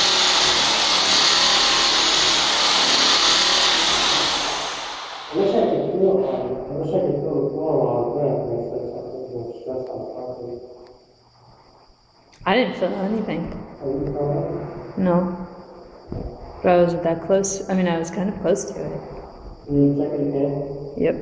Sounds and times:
Drill: 0:00.0 - 0:05.6
Speech: 0:05.4 - 0:10.6, 0:12.5 - 0:15.4, 0:16.6 - 0:19.0, 0:19.7 - 0:21.2.

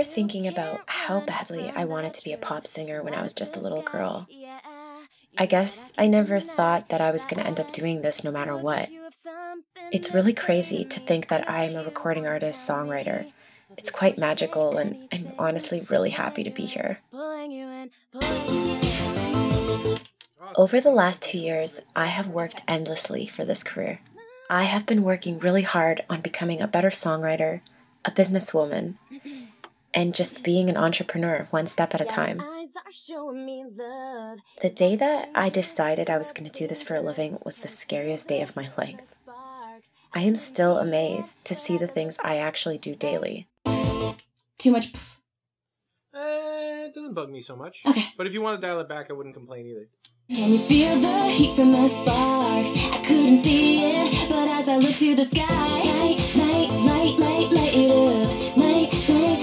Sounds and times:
Speech: 0:00.0 - 0:04.3, 0:05.4 - 0:09.0, 0:09.9 - 0:17.0, 0:20.6 - 0:29.0, 0:30.0 - 0:32.5, 0:34.6 - 0:39.2, 0:40.2 - 0:43.5, 0:44.6 - 0:45.2, 0:46.2 - 0:49.9.

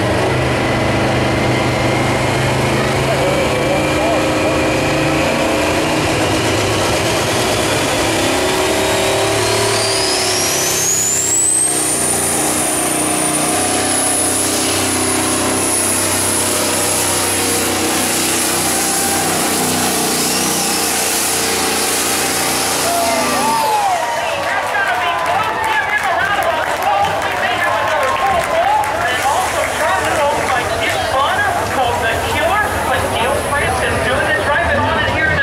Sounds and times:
Truck: 0:00.0 - 0:35.4
Speech: 0:02.8 - 0:04.7, 0:22.9 - 0:35.4.

